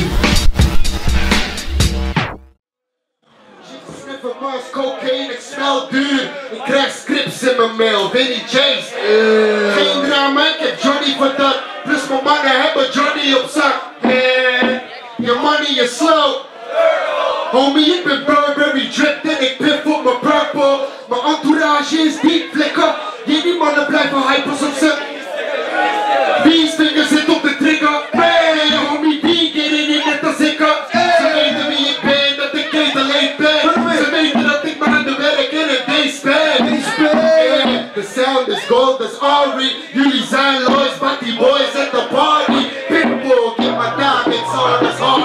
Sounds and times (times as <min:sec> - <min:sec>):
Music: 0:00.0 - 0:02.6, 0:31.0 - 0:35.2, 0:42.5 - 0:45.2
Speech: 0:03.4 - 0:16.4, 0:17.5 - 0:45.2.